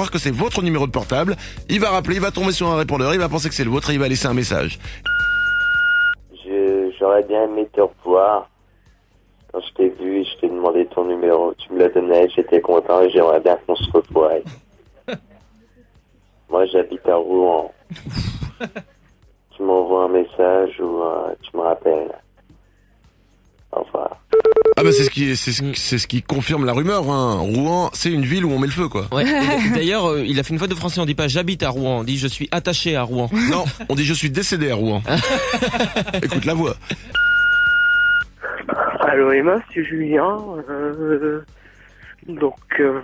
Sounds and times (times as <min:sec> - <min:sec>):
Speech: 0:00.0 - 0:04.8, 0:06.4 - 0:08.5, 0:09.5 - 0:14.5, 0:16.5 - 0:17.8, 0:19.6 - 0:22.2, 0:24.8 - 0:35.1, 0:36.2 - 0:36.8, 0:38.5 - 0:41.5, 0:42.2 - 0:43.0.